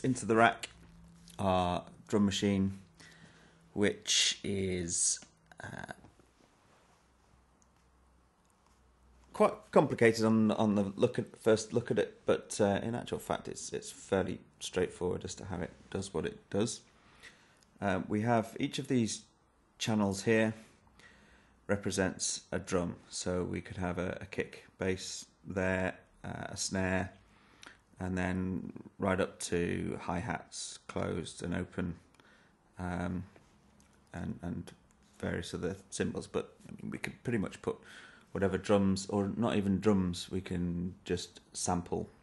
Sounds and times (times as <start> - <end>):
Speech: 0.0 - 2.9, 3.8 - 6.2, 9.3 - 16.9, 17.8 - 20.8, 21.7 - 27.2, 28.0 - 32.1, 32.8 - 33.4, 34.1 - 42.2.